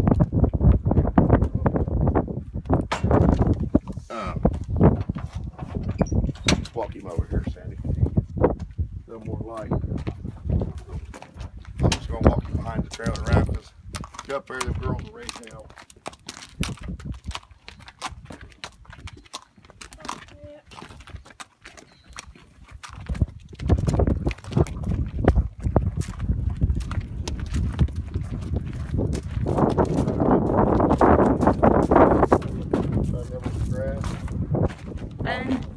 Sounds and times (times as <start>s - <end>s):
Clip-clop: 0.0s - 35.7s.